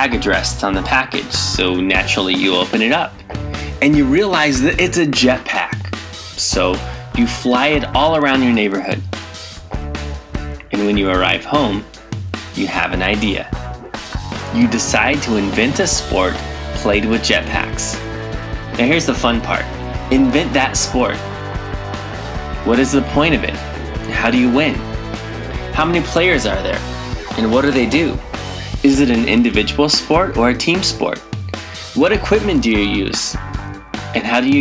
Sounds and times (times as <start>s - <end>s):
Speech: 0.0s - 9.0s, 10.6s - 11.9s, 12.6s - 13.6s, 14.5s - 18.0s, 18.8s - 21.2s, 22.6s - 24.8s, 25.8s - 28.2s, 28.8s - 31.3s, 32.0s - 33.4s, 34.2s - 34.6s
Music: 0.0s - 34.6s.